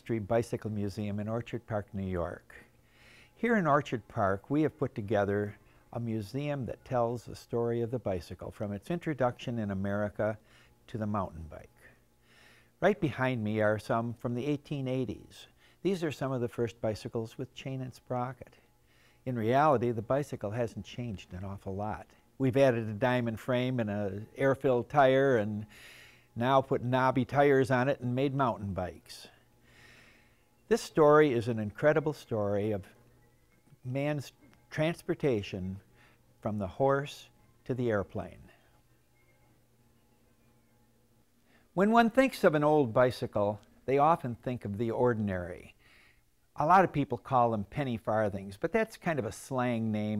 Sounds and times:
Speech: 0.0 - 2.7, 3.4 - 12.0, 12.8 - 18.6, 19.2 - 25.7, 26.4 - 29.4, 30.7 - 33.0, 33.8 - 35.8, 36.4 - 38.6, 41.8 - 45.8, 46.6 - 50.1.

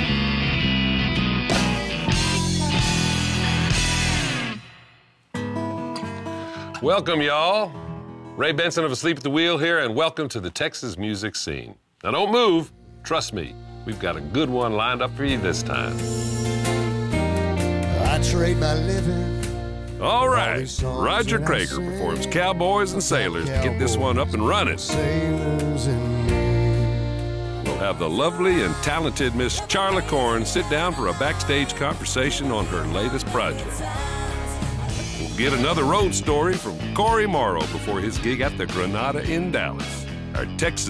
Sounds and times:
Music: 0.0 - 9.2, 12.6 - 40.9
Speech: 6.8 - 7.8, 8.4 - 16.1, 20.0 - 25.0, 27.7 - 33.7, 35.3 - 40.9.

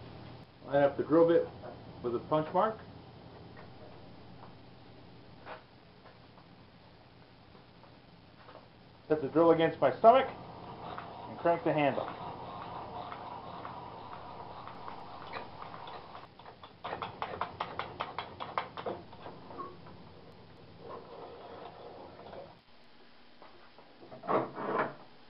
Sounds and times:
Speech: 0.6 - 2.8, 9.1 - 10.4, 11.3 - 12.1.

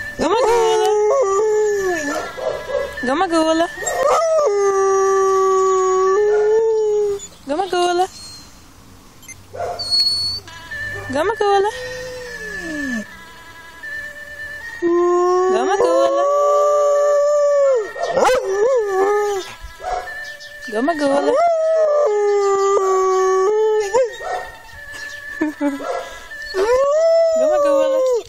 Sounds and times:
Whimper (dog): 0.2 - 4.3, 9.8 - 10.4, 11.0 - 13.1, 17.8 - 28.2
Speech: 7.5 - 8.1, 20.7 - 21.4.

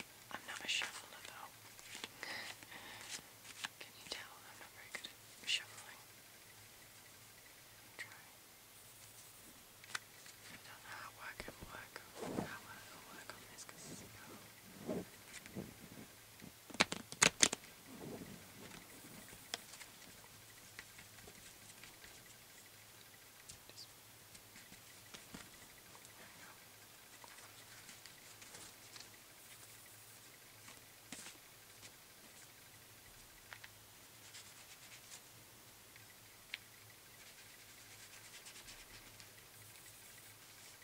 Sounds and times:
Inside, small room: 0.0 - 40.8
Shuffling cards: 0.5 - 3.8, 16.6 - 17.7.

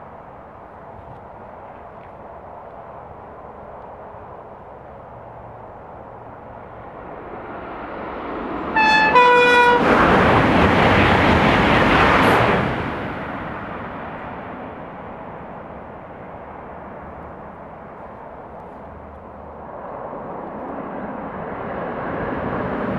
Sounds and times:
Train: 0.0 - 22.9.

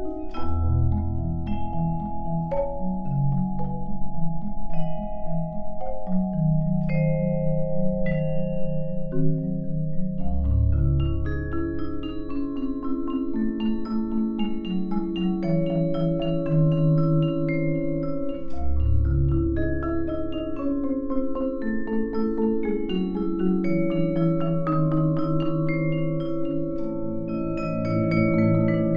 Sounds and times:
Vibraphone: 0.0 - 28.9.

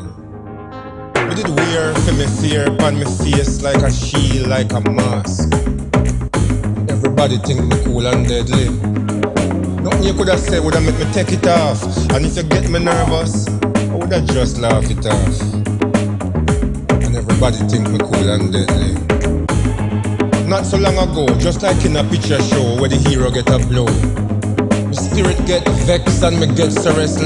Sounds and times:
Music of Africa: 1.1 - 27.2
Speech: 1.2 - 5.5, 6.9 - 8.8, 9.8 - 15.6, 17.0 - 19.0, 20.4 - 24.0, 24.9 - 27.2.

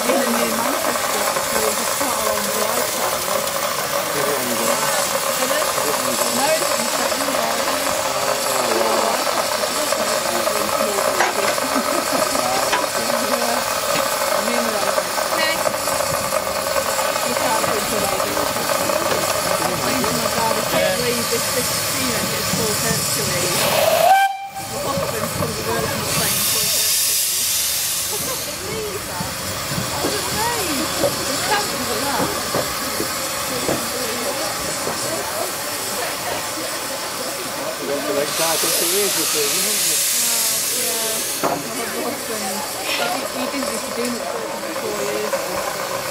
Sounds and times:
Railroad car, train wagon: 0.0 - 46.1
Train whistle: 23.7 - 24.8
Speech: 24.7 - 27.5, 33.4 - 45.8.

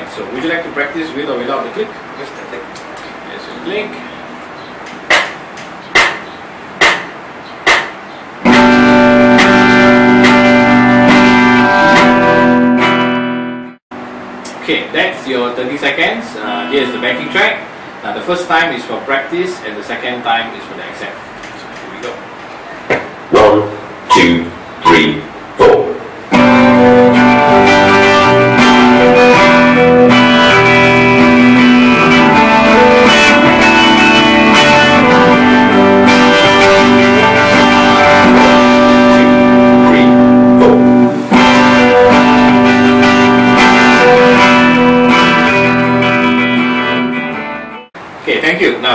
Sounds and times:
Speech: 0.0 - 4.2, 14.6 - 26.0, 39.8 - 40.8, 48.2 - 48.9
Guitar: 7.7 - 14.7, 15.9 - 17.8, 24.1 - 48.0.

